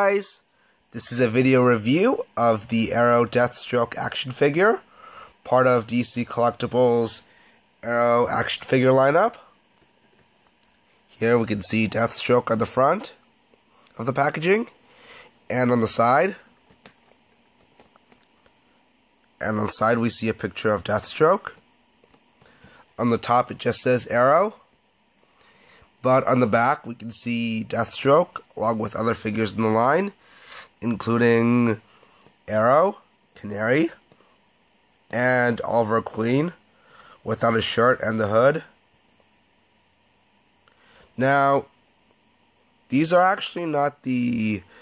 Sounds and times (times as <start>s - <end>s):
Speech: 0.0s - 9.6s, 11.1s - 13.2s, 13.9s - 14.8s, 15.5s - 16.5s, 19.4s - 21.6s, 23.0s - 24.7s, 26.0s - 30.2s, 30.8s - 34.0s, 35.1s - 36.6s, 37.2s - 38.8s, 41.2s - 41.8s, 42.9s - 44.8s.